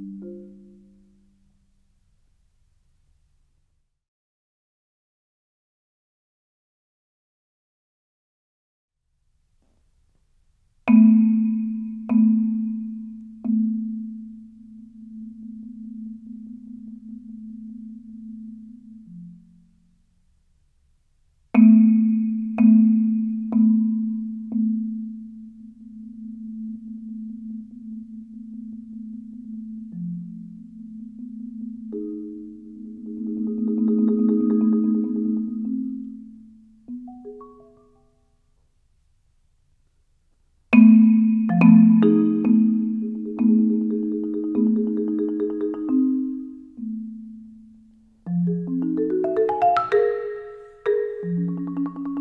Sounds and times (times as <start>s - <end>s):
Marimba, xylophone: 0.0s - 1.4s, 10.9s - 19.8s, 21.6s - 38.2s, 40.8s - 52.2s.